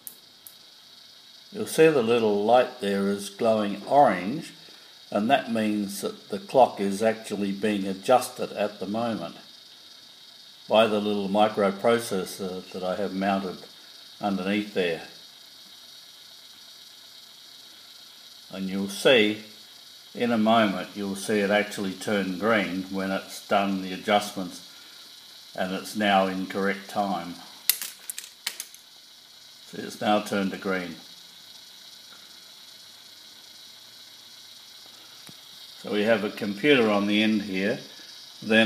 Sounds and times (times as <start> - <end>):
Speech: 1.6 - 9.4, 10.7 - 15.2, 18.5 - 19.5, 20.2 - 24.6, 25.6 - 27.4, 29.7 - 31.0, 35.8 - 38.6.